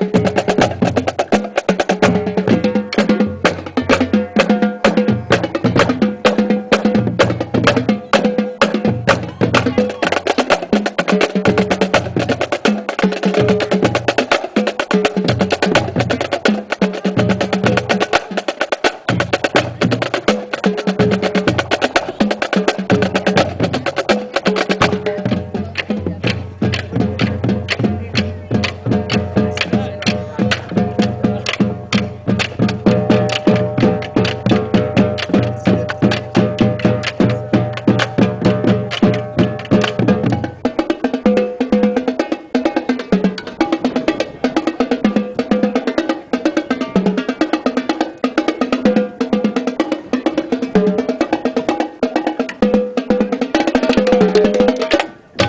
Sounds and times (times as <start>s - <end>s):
Bass drum: 0.0s - 40.7s
Drum roll: 0.0s - 55.4s.